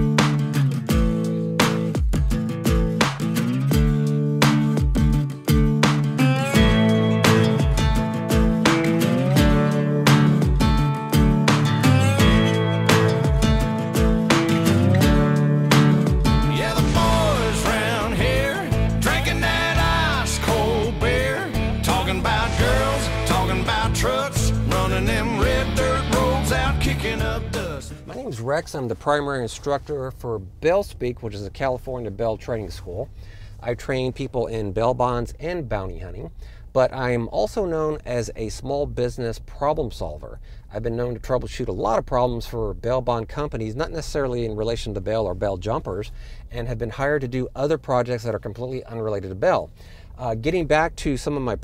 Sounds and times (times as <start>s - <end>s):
Music: 0.0s - 28.2s
Speech: 28.0s - 51.6s.